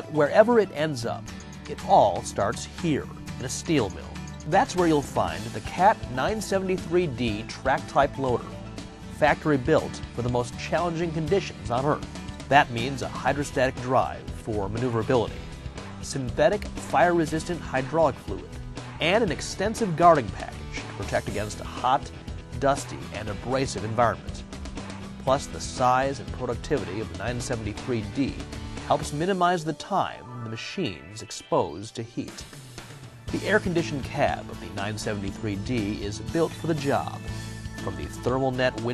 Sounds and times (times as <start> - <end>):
Speech: 0.0 - 8.5, 9.2 - 15.4, 16.0 - 24.4, 25.3 - 32.4, 33.3 - 38.9
Music: 0.0 - 38.9.